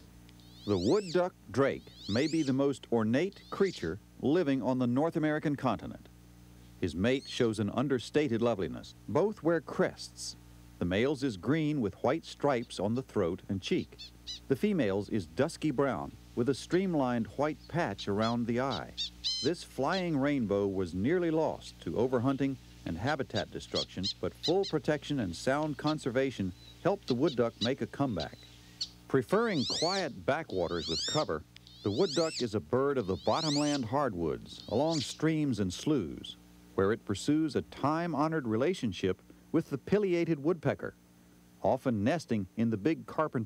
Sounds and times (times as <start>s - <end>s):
Speech: 0.7s - 6.1s, 6.8s - 28.4s, 29.1s - 41.0s, 41.6s - 43.4s
Duck: 23.3s - 24.8s, 29.6s - 32.4s.